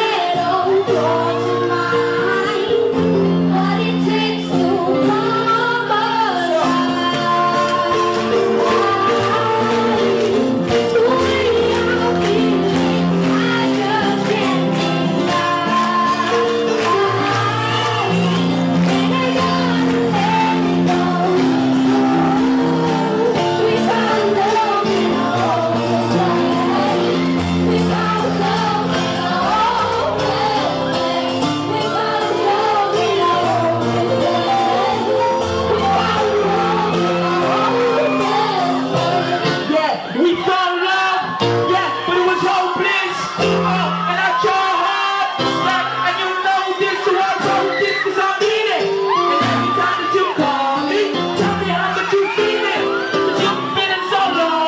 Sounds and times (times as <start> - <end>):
Music: 0.0 - 54.6.